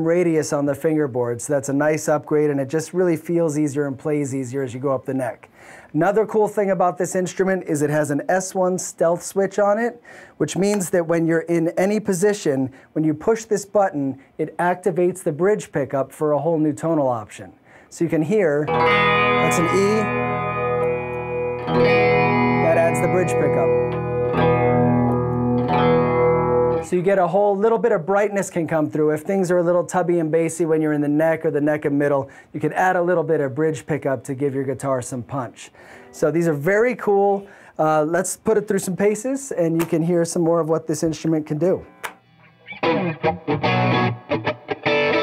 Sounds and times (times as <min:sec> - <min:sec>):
Speech: 0:00.0 - 0:18.7, 0:19.4 - 0:20.1, 0:22.6 - 0:23.8, 0:26.9 - 0:41.9
Electric guitar: 0:18.7 - 0:26.9, 0:41.9 - 0:45.2.